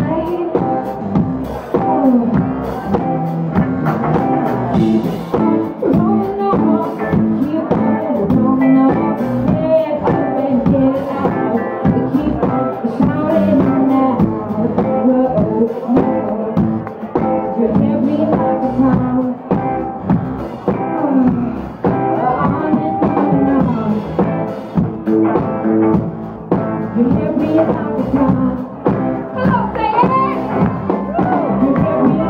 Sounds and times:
Music: 0.0s - 32.3s.

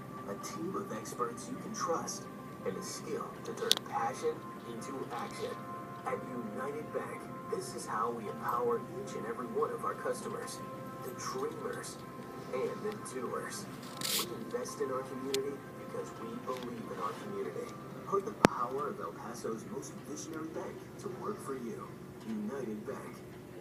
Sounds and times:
Music: 0.0s - 23.6s
Speech: 0.3s - 23.3s.

